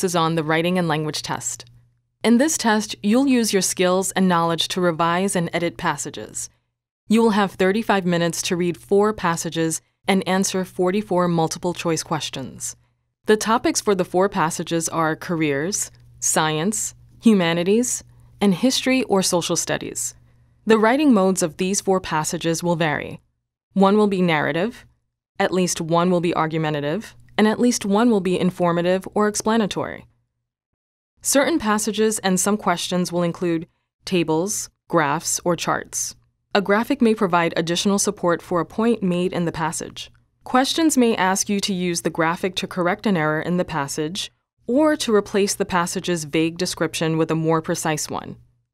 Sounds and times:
Speech: 0.0s - 6.5s, 7.1s - 23.2s, 23.8s - 30.1s, 31.2s - 48.4s.

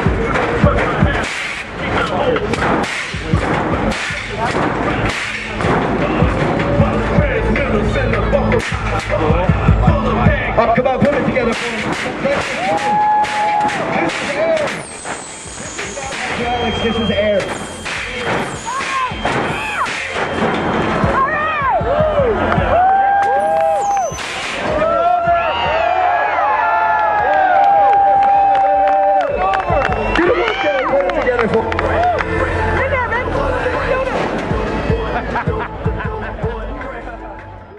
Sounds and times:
Speech: 9.1s - 12.6s, 15.8s - 18.4s, 29.7s - 31.8s.

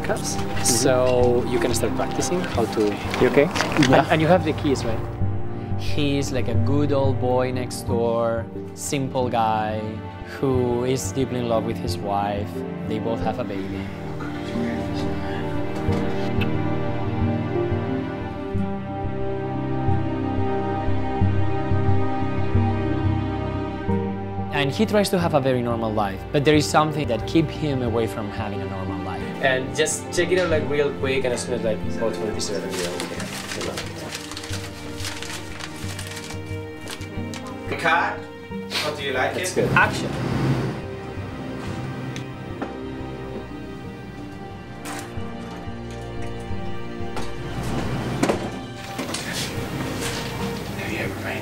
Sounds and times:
Music: 0.0s - 51.4s
Speech: 5.8s - 15.2s, 24.5s - 34.1s, 38.8s - 40.2s, 50.8s - 51.4s.

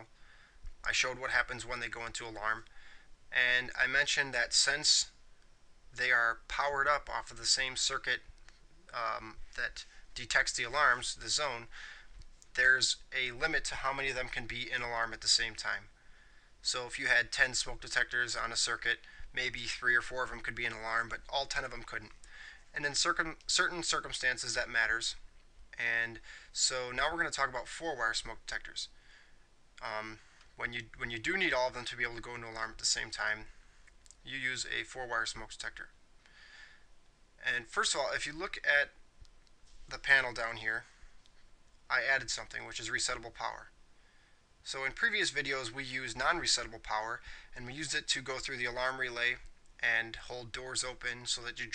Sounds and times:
Speech: 0.8s - 2.7s, 3.3s - 5.2s, 6.0s - 8.3s, 8.9s - 11.7s, 12.5s - 15.9s, 16.6s - 25.2s, 25.8s - 28.9s, 29.8s - 33.6s, 34.2s - 36.0s, 37.4s - 39.0s, 39.9s - 41.0s, 41.9s - 43.8s, 44.6s - 51.7s.

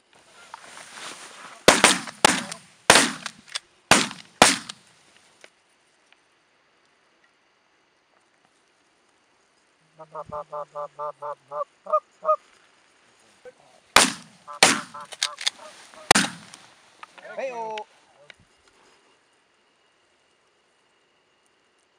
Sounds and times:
Honk: 10.0s - 12.4s, 14.5s - 16.2s.

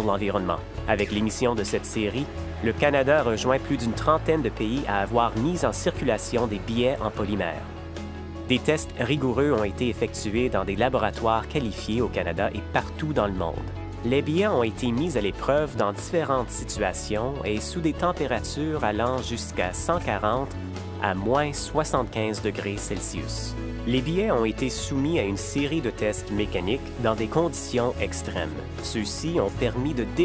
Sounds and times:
Speech: 0.0s - 7.7s, 8.5s - 30.2s
Music: 0.0s - 30.2s.

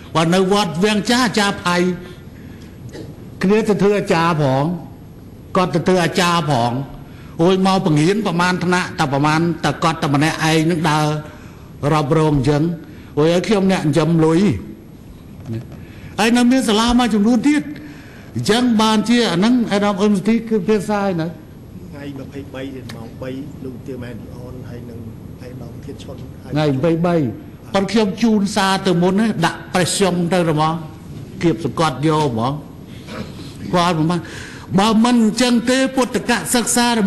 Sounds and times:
Narration, monologue: 0.0s - 37.0s
Male speech, man speaking: 0.2s - 2.0s, 3.4s - 4.9s, 5.6s - 14.7s, 16.2s - 17.8s, 18.4s - 32.7s, 33.6s - 37.0s.

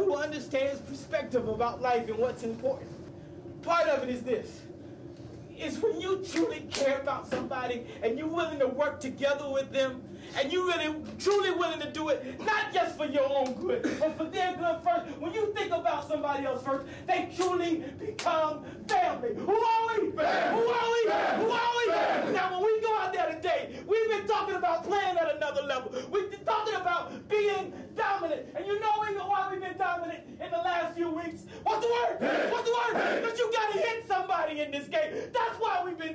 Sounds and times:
Male speech, man speaking: 0.0s - 2.9s, 3.6s - 4.7s, 5.6s - 36.1s
Narration, monologue: 0.0s - 36.1s.

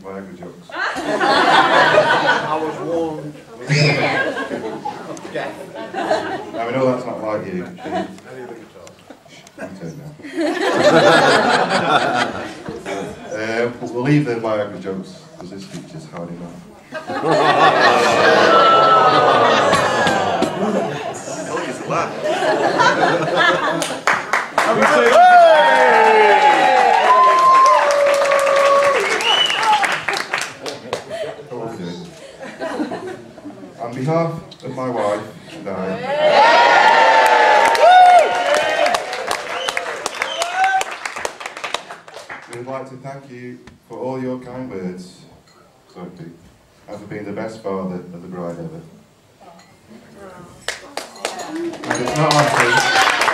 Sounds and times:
Male speech, man speaking: 0.0s - 0.7s, 2.4s - 4.3s, 6.5s - 9.0s, 9.6s - 10.2s, 12.8s - 16.7s, 20.6s - 22.2s, 31.5s - 32.2s, 33.8s - 36.1s, 42.5s - 45.3s, 45.9s - 49.0s, 51.9s - 52.9s
Conversation: 0.0s - 25.7s, 28.4s - 39.0s, 41.3s - 53.3s.

